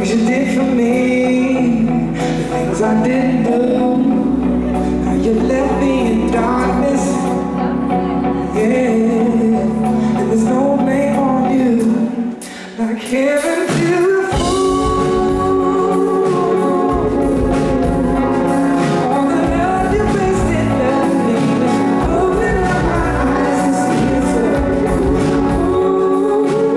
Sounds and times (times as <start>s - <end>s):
Pop music: 0.0s - 26.7s.